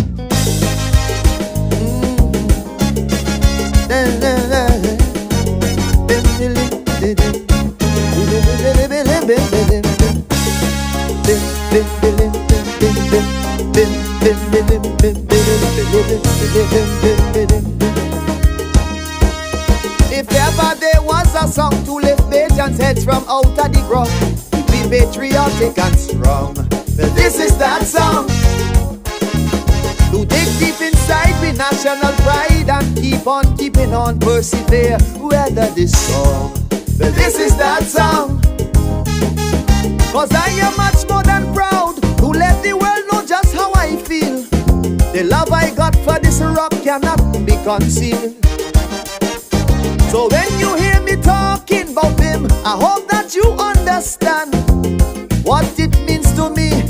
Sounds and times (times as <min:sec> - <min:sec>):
Disco: 0:00.0 - 0:56.8
Rhythm and blues: 0:00.0 - 0:56.8.